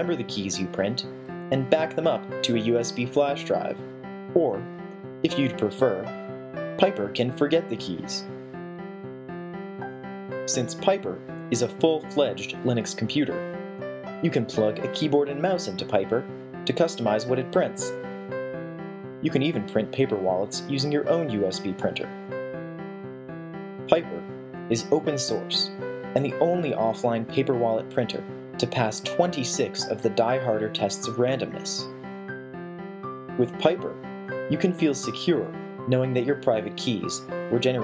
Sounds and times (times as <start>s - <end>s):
Speech: 0.0s - 3.8s, 4.4s - 6.1s, 6.8s - 8.3s, 10.5s - 13.4s, 14.2s - 18.0s, 19.2s - 22.1s, 23.9s - 31.9s, 33.4s - 37.8s
Music: 0.0s - 37.8s.